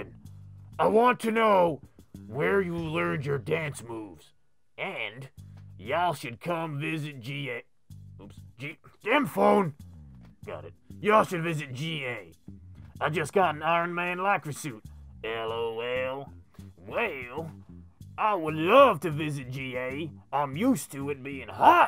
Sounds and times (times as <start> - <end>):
Inside, small room: 0.0 - 21.8
Speech: 0.8 - 9.8, 10.5 - 12.3, 13.0 - 17.5, 18.2 - 21.8.